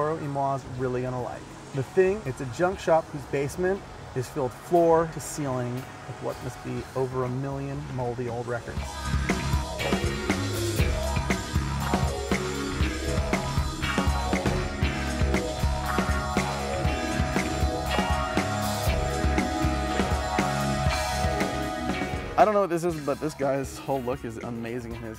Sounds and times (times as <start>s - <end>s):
Speech: 0.0s - 8.8s, 22.4s - 25.1s
House music: 8.7s - 24.4s.